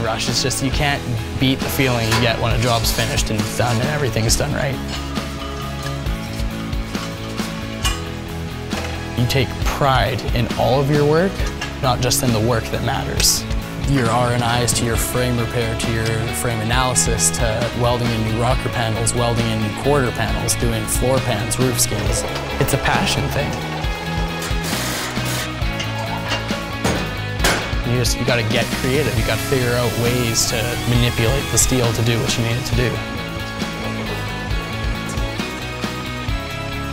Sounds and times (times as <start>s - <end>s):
Speech: 0.0s - 4.8s, 9.2s - 23.6s, 27.9s - 33.1s
Music: 0.0s - 36.9s.